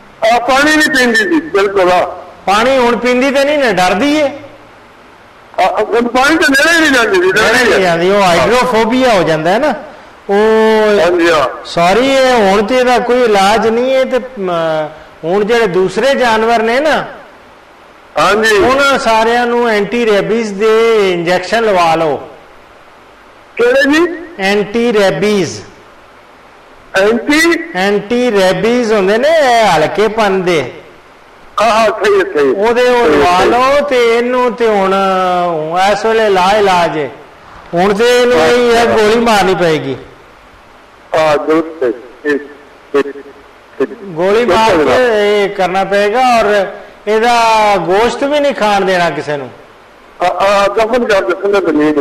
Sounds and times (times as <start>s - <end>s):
Narration, monologue: 0.0s - 52.0s.